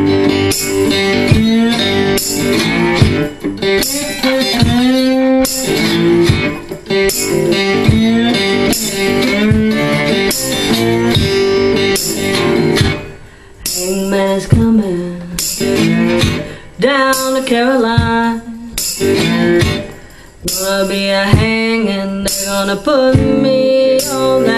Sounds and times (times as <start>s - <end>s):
Bass guitar: 0.0s - 13.8s, 14.5s - 16.6s, 18.8s - 20.1s
Acoustic guitar: 0.0s - 24.5s
Electric guitar: 0.0s - 24.5s
Strum: 0.0s - 24.5s.